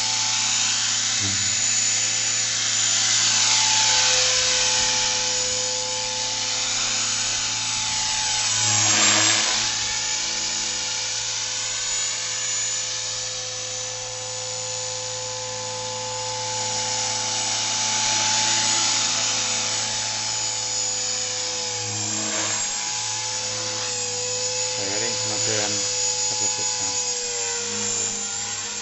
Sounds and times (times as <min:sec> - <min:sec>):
Helicopter: 0:00.0 - 0:28.8.